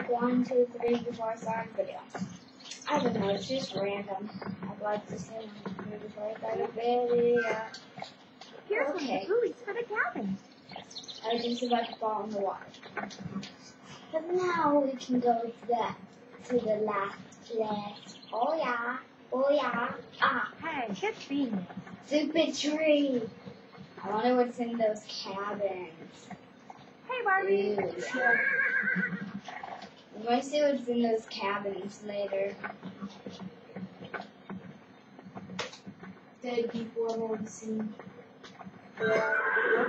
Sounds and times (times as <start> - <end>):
Speech: 0.0 - 23.4, 24.0 - 26.4, 27.1 - 28.4, 30.1 - 34.2, 36.4 - 38.0
Clip-clop: 19.6 - 39.8.